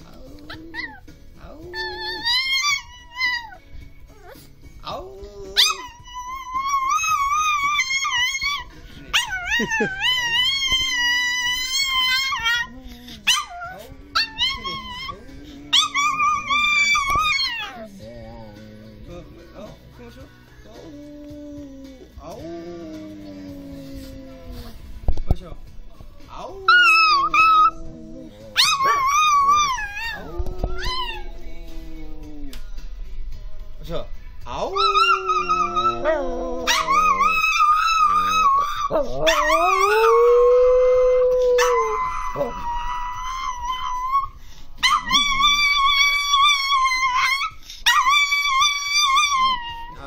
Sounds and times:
Music: 0.0 - 50.0.

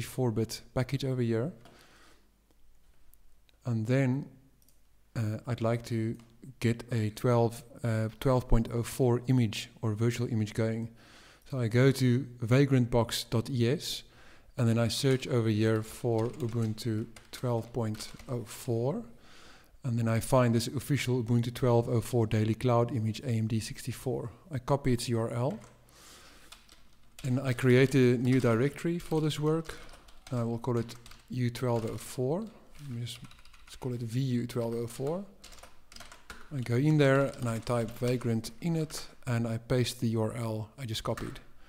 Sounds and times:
Speech: 0.0 - 1.6, 3.6 - 4.4, 5.2 - 10.9, 11.5 - 19.1, 19.8 - 25.7, 27.2 - 35.3, 36.5 - 41.5.

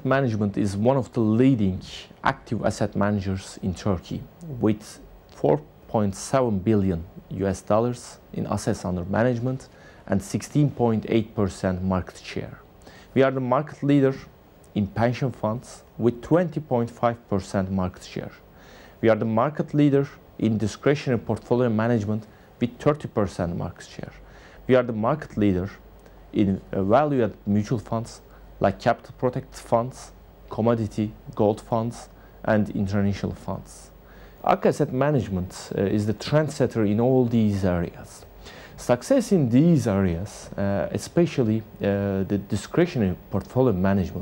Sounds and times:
Speech: 0.0 - 44.2.

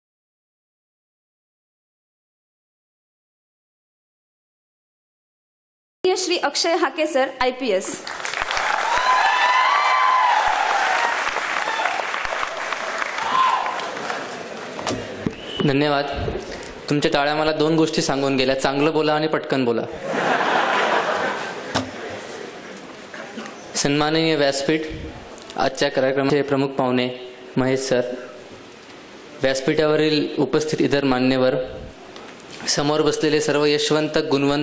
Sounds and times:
Narration, monologue: 6.0 - 8.0, 15.5 - 20.2, 23.6 - 34.6
Male speech, man speaking: 15.6 - 16.3, 16.9 - 20.0, 23.8 - 25.0, 25.6 - 28.3, 29.4 - 31.8, 32.7 - 34.6.

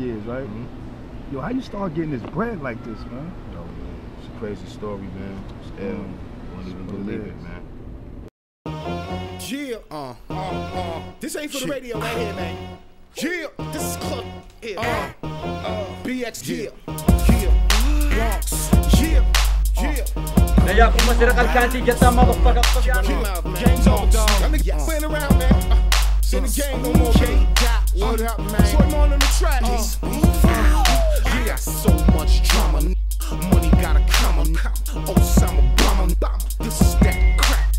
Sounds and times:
Speech: 1.3 - 7.6, 11.3 - 12.4, 20.6 - 24.1
Music: 8.7 - 37.7.

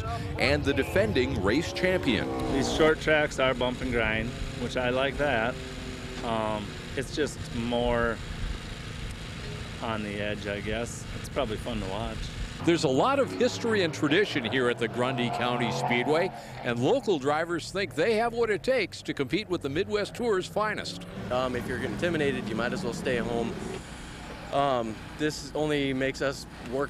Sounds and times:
Speech: 0.0 - 5.5, 6.2 - 8.2, 9.8 - 23.6, 24.6 - 26.8.

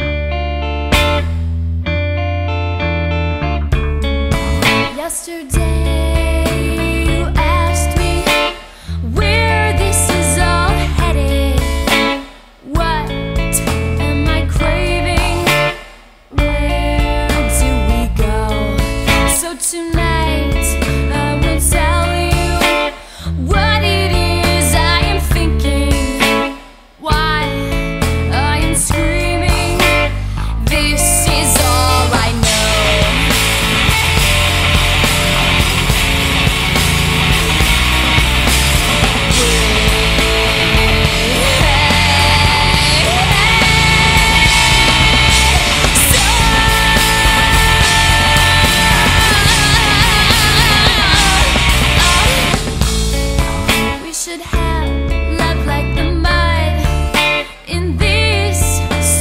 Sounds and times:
Soul music: 0.0 - 59.2.

